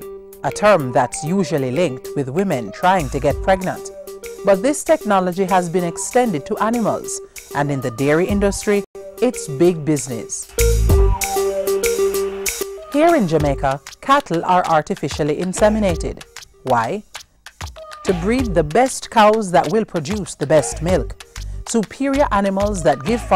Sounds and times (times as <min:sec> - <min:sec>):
Music: 0:00.0 - 0:23.3
Speech: 0:00.4 - 0:03.9, 0:04.5 - 0:10.5, 0:12.9 - 0:17.0, 0:18.1 - 0:23.3.